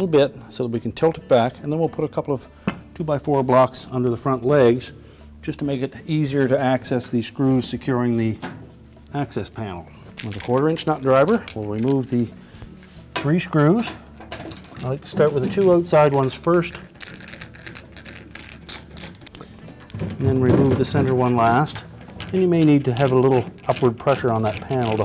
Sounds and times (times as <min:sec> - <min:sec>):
Speech: 0:00.0 - 0:02.4, 0:03.0 - 0:04.9, 0:05.5 - 0:08.4, 0:09.1 - 0:12.3, 0:13.2 - 0:14.0, 0:14.8 - 0:16.8, 0:20.2 - 0:25.0.